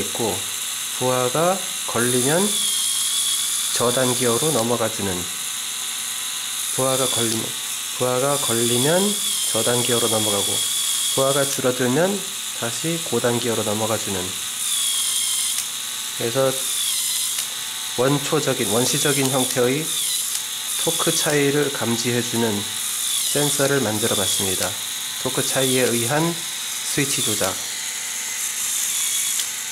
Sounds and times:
Speech: 0.0 - 2.6, 3.8 - 5.4, 6.8 - 14.4, 16.2 - 16.6, 18.0 - 19.9, 20.8 - 22.7, 23.4 - 27.6.

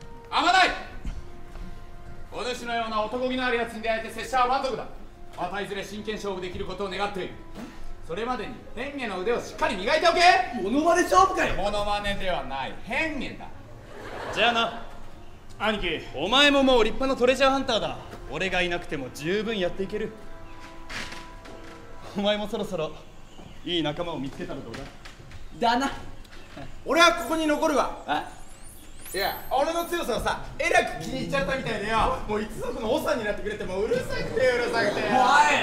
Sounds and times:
Music: 0.0 - 35.6
Laughter: 13.8 - 15.0.

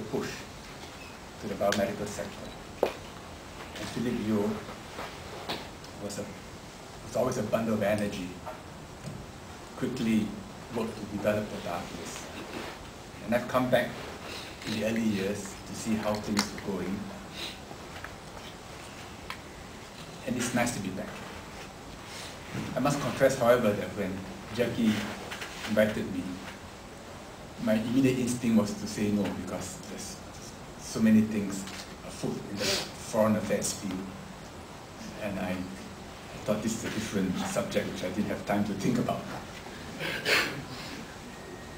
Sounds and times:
Male speech, man speaking: 0.0 - 0.5, 1.4 - 2.6, 3.8 - 4.7, 6.0 - 6.4, 7.1 - 8.4, 9.8 - 12.3, 13.2 - 14.0, 14.6 - 17.1, 20.2 - 21.3, 22.8 - 26.5, 27.6 - 34.2, 35.0 - 39.4
Narration, monologue: 0.0 - 41.7.

